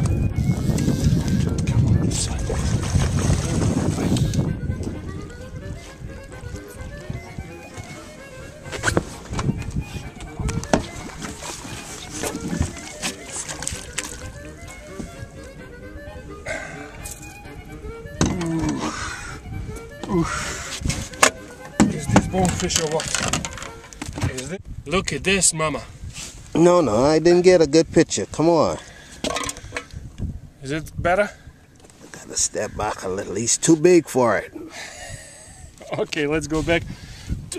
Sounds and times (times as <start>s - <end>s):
Music: 0.0s - 25.1s
Outside, rural or natural: 0.0s - 37.5s.